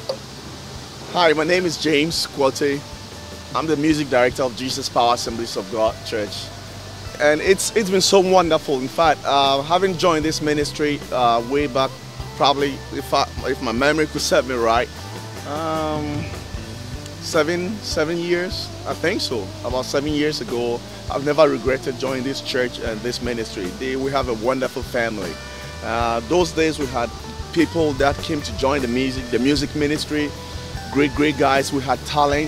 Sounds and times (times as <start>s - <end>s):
Music: 0.0s - 32.4s
Speech: 1.1s - 2.8s, 3.5s - 6.5s, 7.2s - 14.9s, 15.5s - 16.4s, 17.2s - 30.3s, 30.9s - 32.4s.